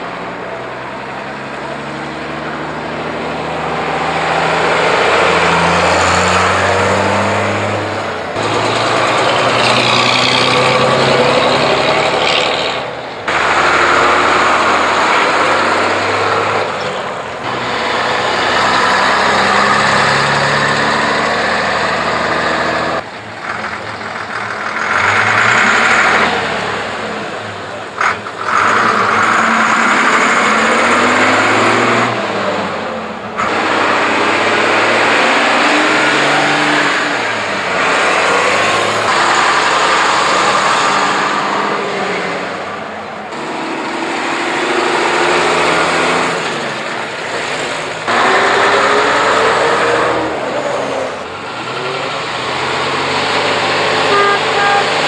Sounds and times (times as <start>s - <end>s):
Truck: 0.0s - 55.0s.